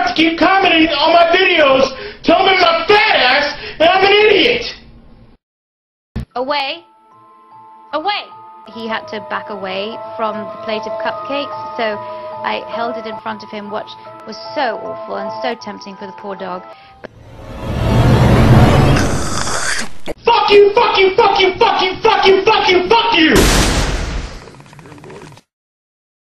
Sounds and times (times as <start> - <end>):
Speech: 0.0 - 4.8, 8.0 - 16.6, 20.2 - 23.4, 24.4 - 25.4
Music: 6.2 - 19.2.